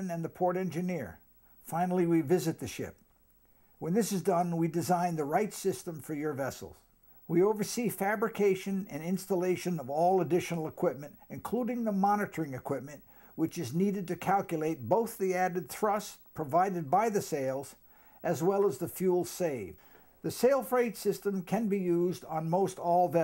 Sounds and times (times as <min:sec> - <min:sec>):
Speech: 0:00.0 - 0:03.0, 0:03.8 - 0:23.2.